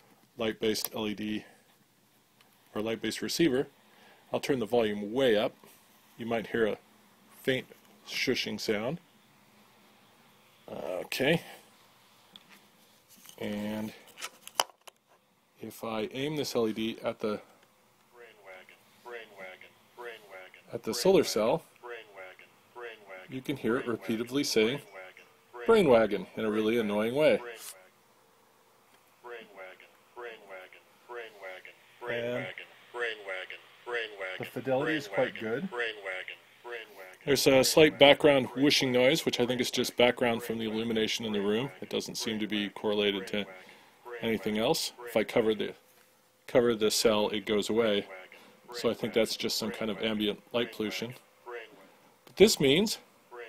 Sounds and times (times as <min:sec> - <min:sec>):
Speech: 0:00.4 - 0:01.6, 0:02.8 - 0:03.7, 0:04.3 - 0:05.6, 0:06.2 - 0:06.8, 0:07.4 - 0:09.0, 0:10.7 - 0:11.6, 0:13.4 - 0:14.0, 0:15.6 - 0:17.5, 0:18.2 - 0:27.8, 0:29.2 - 0:45.8, 0:46.5 - 0:53.4.